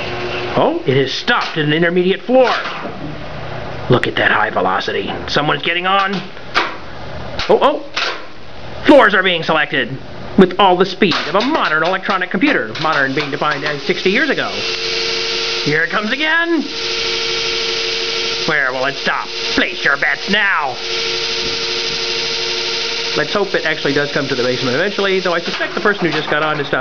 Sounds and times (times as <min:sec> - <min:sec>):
Speech: 0:00.6 - 0:02.7, 0:03.9 - 0:06.3, 0:07.4 - 0:07.9, 0:08.9 - 0:14.6, 0:15.7 - 0:16.7, 0:18.5 - 0:20.8, 0:23.2 - 0:26.8.